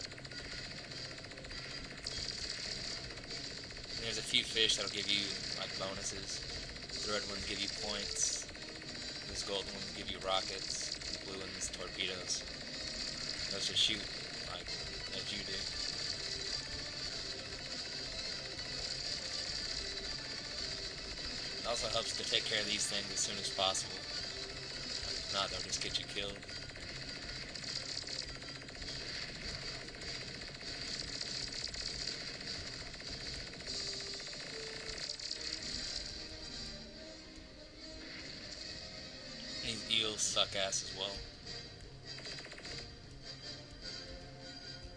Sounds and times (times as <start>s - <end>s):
Music: 0.0s - 44.9s
Speech: 4.0s - 6.4s, 7.0s - 8.5s, 9.3s - 12.4s, 13.5s - 15.7s, 21.6s - 24.0s, 25.3s - 26.4s, 39.6s - 41.2s.